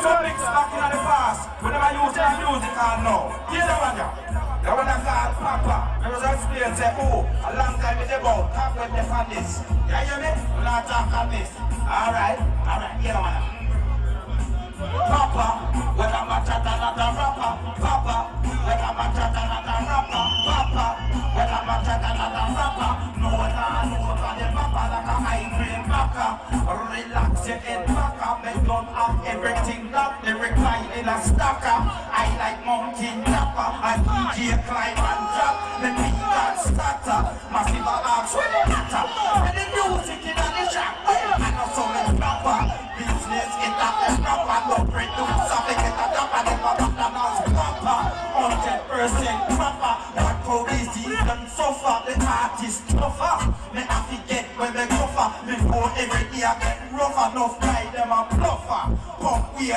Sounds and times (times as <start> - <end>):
Music: 0.0 - 59.7.